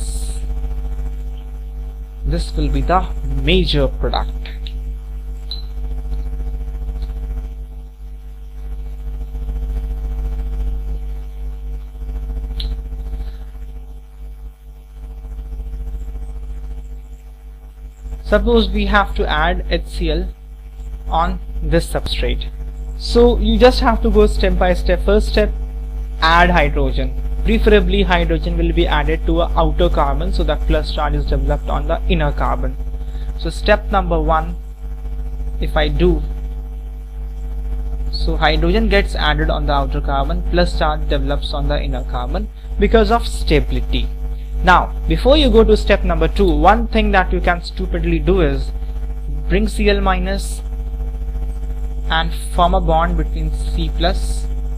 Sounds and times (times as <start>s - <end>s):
Speech: 0.0s - 0.5s, 2.3s - 4.7s, 18.3s - 20.3s, 21.1s - 25.6s, 26.2s - 32.8s, 33.4s - 34.6s, 35.6s - 36.3s, 38.2s - 48.7s, 49.3s - 50.6s, 52.1s - 54.5s.